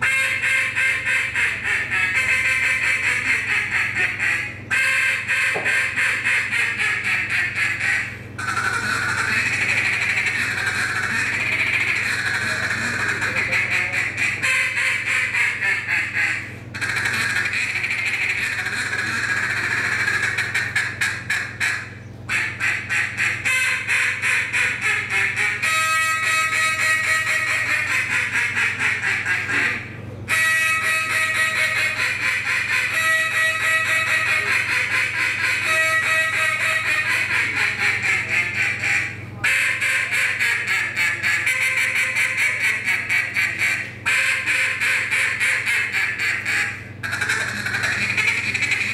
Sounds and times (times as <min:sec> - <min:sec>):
Quack: 0:00.0 - 0:48.9.